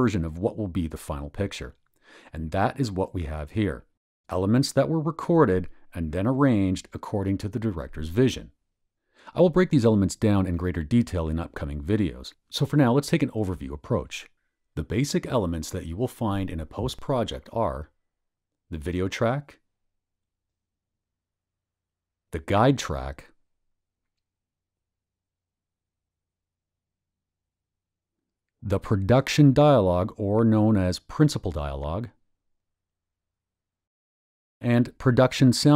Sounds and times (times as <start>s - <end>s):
Speech: 0.0s - 8.6s, 9.3s - 18.0s, 18.7s - 19.6s, 22.4s - 23.4s, 28.6s - 32.2s, 34.6s - 35.7s.